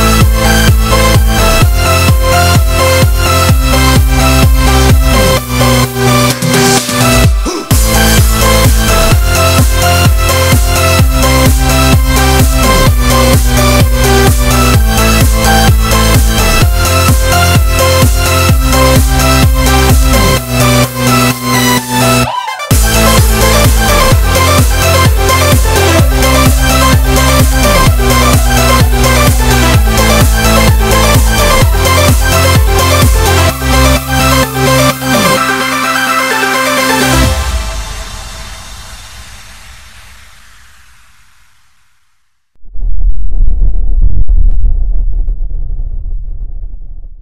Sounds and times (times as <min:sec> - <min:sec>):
Music: 0:00.0 - 0:41.2
Silence: 0:37.3 - 0:47.2.